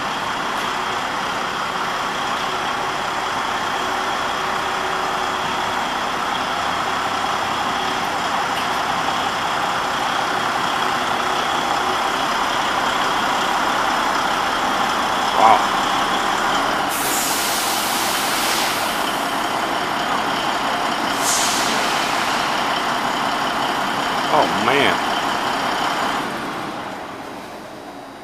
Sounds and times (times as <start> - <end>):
Truck: 0.0 - 28.2.